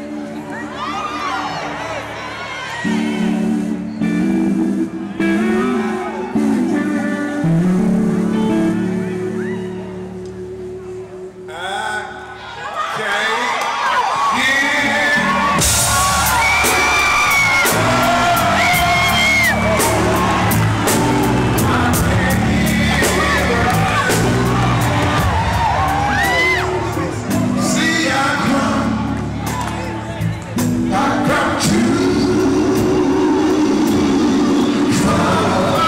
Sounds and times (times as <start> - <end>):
Blues: 0.0 - 11.5, 13.6 - 35.8.